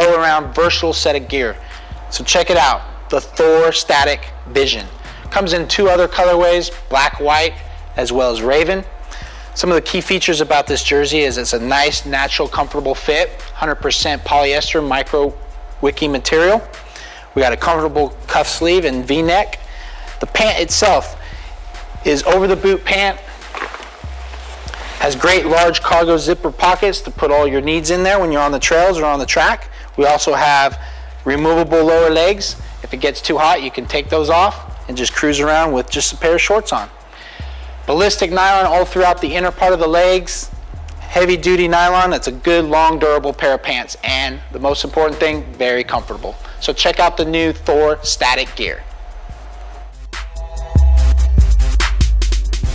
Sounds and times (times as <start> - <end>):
Speech: 0.0 - 8.9, 9.6 - 16.8, 17.4 - 19.6, 20.2 - 21.2, 22.0 - 23.3, 25.0 - 36.9, 37.9 - 48.8
Music: 0.0 - 52.7.